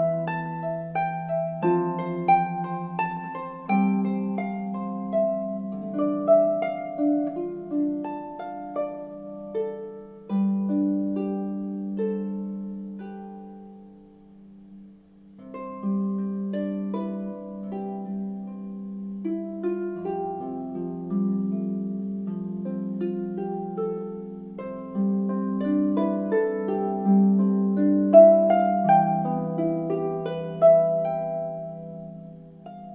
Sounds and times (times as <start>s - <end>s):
Harp: 0.0s - 32.9s.